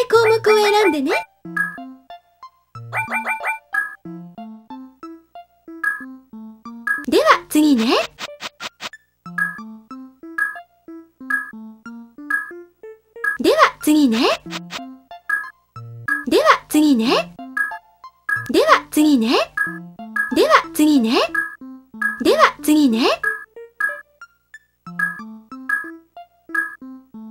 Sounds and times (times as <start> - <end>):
Speech: 0.0 - 1.3, 7.1 - 8.2, 13.4 - 14.5, 16.2 - 17.4, 18.5 - 19.6, 20.3 - 21.4, 22.2 - 23.3
Music: 0.0 - 27.3.